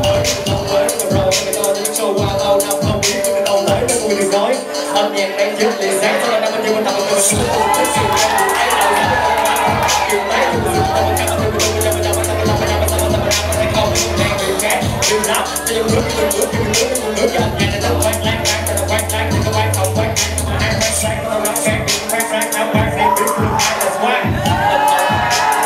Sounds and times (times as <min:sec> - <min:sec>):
Music: 0:00.0 - 0:25.6.